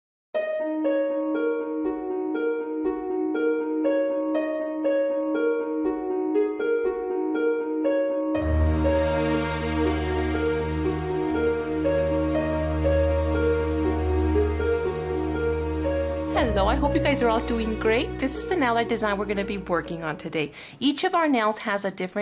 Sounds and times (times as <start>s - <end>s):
Music: 0.4s - 21.1s.